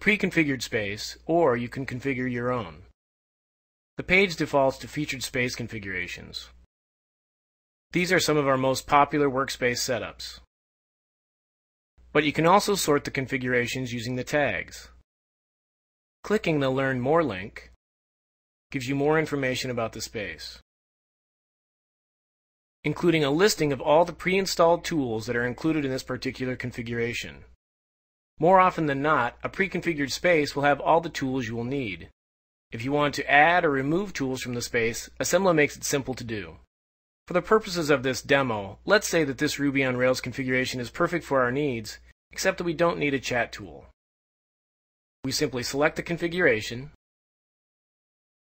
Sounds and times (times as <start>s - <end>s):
Speech: 0.0s - 2.9s, 4.0s - 6.6s, 8.0s - 10.5s, 12.1s - 15.0s, 16.3s - 17.8s, 18.7s - 20.6s, 22.9s - 27.5s, 28.4s - 32.2s, 32.8s - 36.7s, 37.3s - 44.0s, 45.3s - 47.0s.